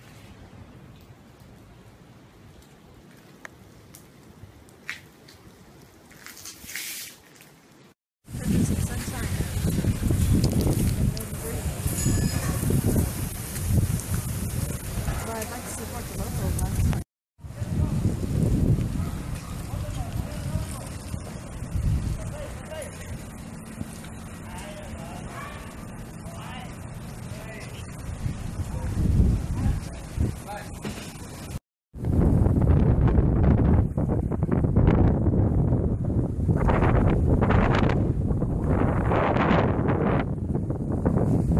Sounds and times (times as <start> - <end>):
Outside, urban or manmade: 0.0 - 41.5
Speech: 8.4 - 9.6, 15.0 - 18.1, 19.6 - 21.0, 29.5 - 30.8.